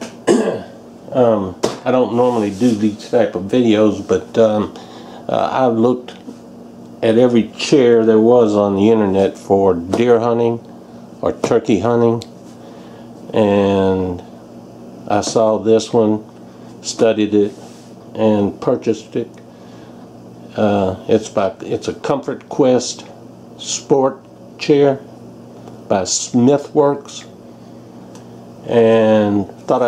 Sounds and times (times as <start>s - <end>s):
Speech: 1.1s - 6.3s, 7.0s - 12.3s, 13.3s - 14.3s, 15.0s - 19.4s, 20.5s - 25.1s, 25.9s - 27.4s, 28.6s - 29.8s.